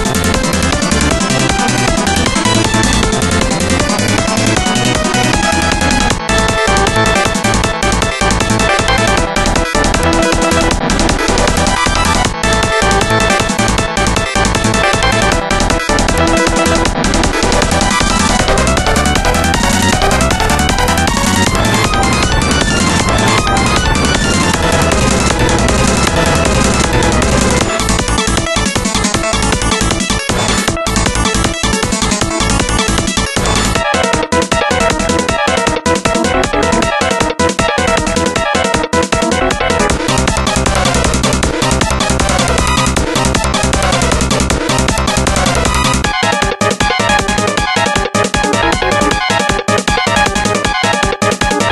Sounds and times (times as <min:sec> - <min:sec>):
Music: 0:00.0 - 0:51.7.